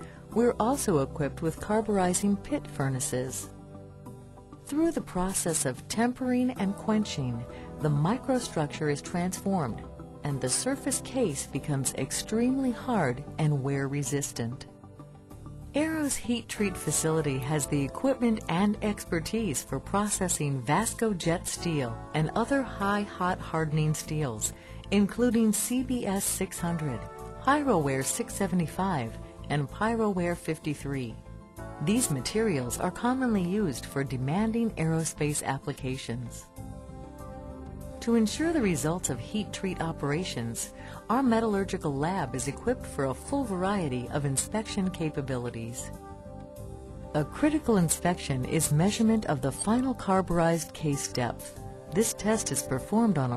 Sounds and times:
Music: 0.0s - 53.3s
Speech: 0.4s - 3.5s, 4.7s - 14.7s, 15.8s - 31.2s, 31.8s - 36.4s, 38.0s - 45.9s, 47.2s - 53.3s.

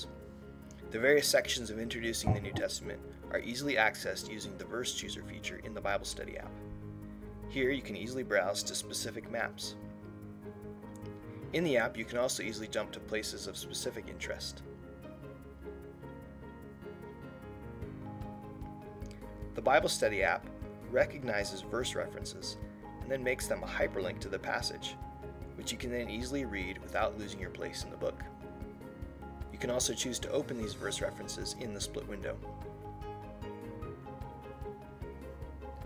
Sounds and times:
Music: 0.0s - 35.8s
Speech: 0.9s - 6.6s, 7.5s - 9.8s, 11.6s - 14.6s, 19.6s - 25.0s, 25.6s - 28.3s, 29.5s - 32.4s.

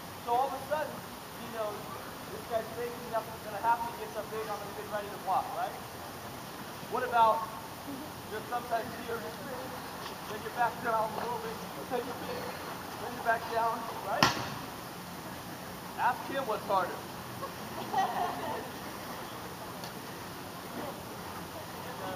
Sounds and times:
Speech: 0.3s - 5.8s, 8.3s - 14.2s, 16.0s - 17.0s.

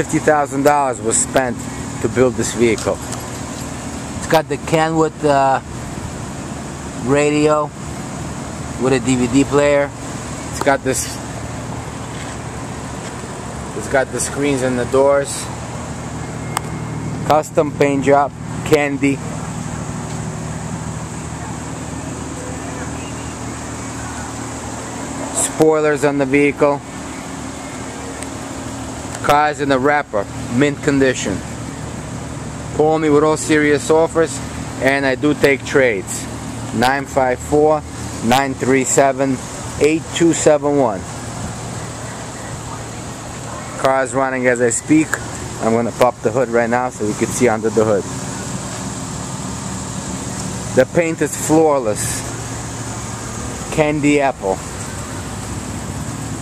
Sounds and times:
Speech: 0.0s - 3.0s, 4.2s - 5.7s, 7.0s - 7.8s, 8.8s - 10.0s, 10.6s - 11.2s, 13.8s - 15.5s, 17.3s - 19.2s, 25.3s - 26.8s, 29.2s - 31.4s, 32.8s - 41.1s, 42.7s - 48.1s, 50.7s - 52.3s, 53.7s - 54.6s
Car: 0.0s - 56.4s.

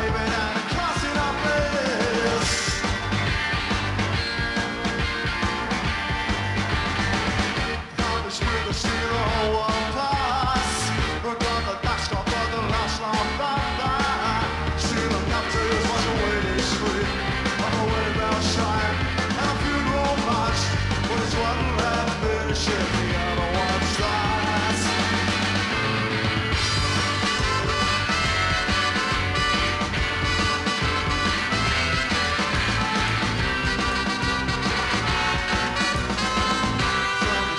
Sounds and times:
Music: 0.0s - 37.5s.

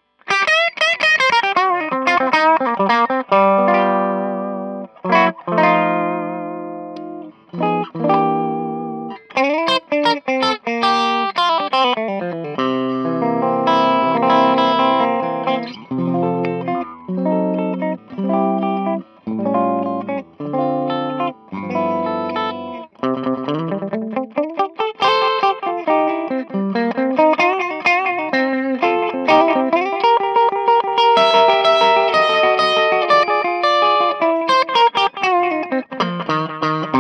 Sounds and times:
Electric guitar: 0.0s - 37.0s.

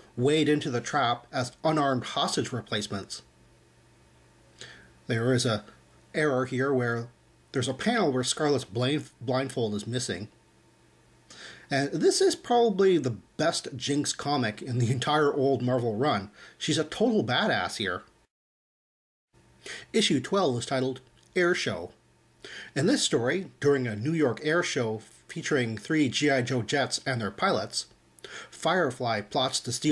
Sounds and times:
Speech: 0.2s - 3.3s, 5.1s - 10.4s, 11.7s - 18.1s, 19.9s - 22.0s, 22.8s - 28.0s, 28.6s - 29.9s.

